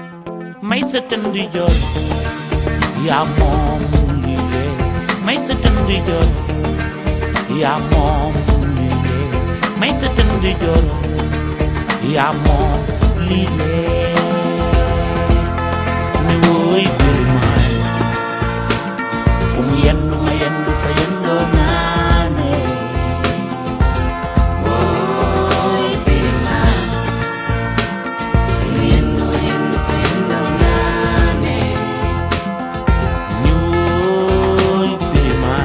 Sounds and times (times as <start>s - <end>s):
Soul music: 0.0s - 35.6s.